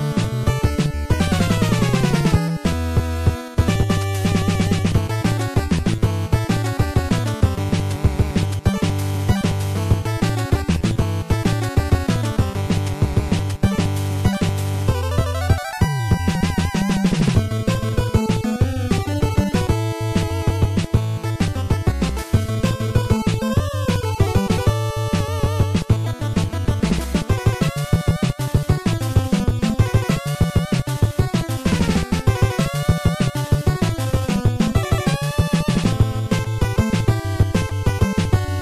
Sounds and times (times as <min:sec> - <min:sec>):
Soundtrack music: 0:00.0 - 0:38.6
Video game music: 0:00.0 - 0:38.6.